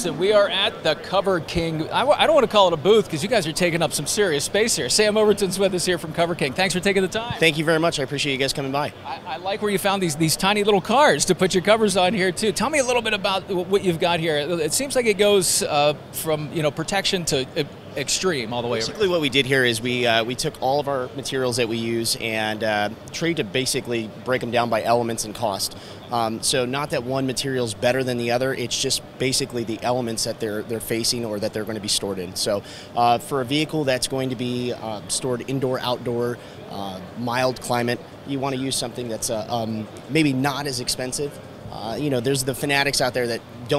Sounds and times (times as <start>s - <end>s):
Speech: 0.0s - 43.7s.